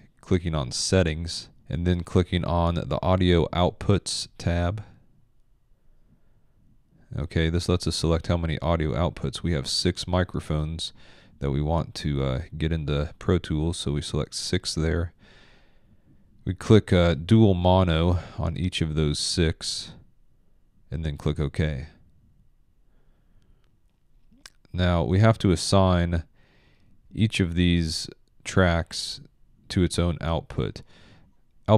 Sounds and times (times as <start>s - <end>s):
Speech: 0.0s - 5.0s, 7.1s - 15.2s, 16.4s - 20.0s, 20.9s - 22.0s, 24.5s - 26.3s, 27.1s - 30.9s.